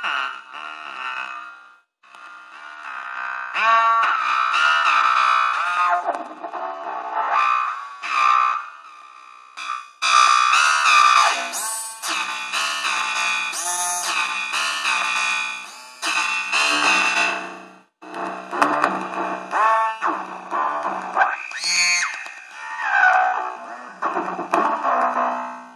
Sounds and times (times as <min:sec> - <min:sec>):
Synthesizer: 0:09.6 - 0:21.6.